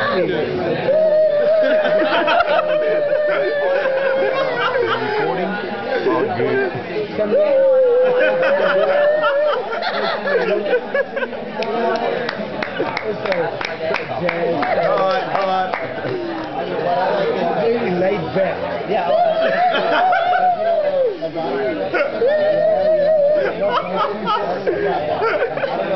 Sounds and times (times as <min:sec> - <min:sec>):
Speech: 0:00.0 - 0:25.9.